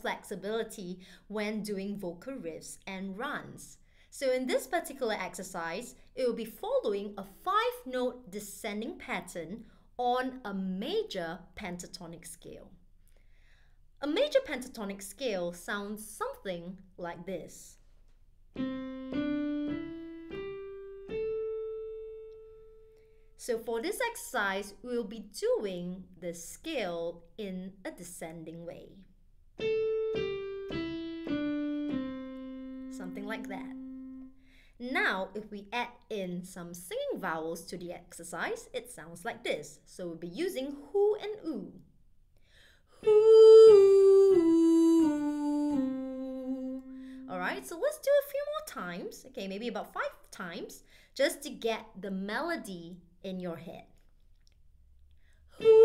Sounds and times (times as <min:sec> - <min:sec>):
Speech: 0:00.0 - 0:12.8, 0:14.0 - 0:17.8, 0:23.4 - 0:29.1, 0:33.0 - 0:33.8, 0:34.8 - 0:41.8, 0:47.3 - 0:54.0
Music: 0:18.6 - 0:23.0, 0:29.6 - 0:34.4.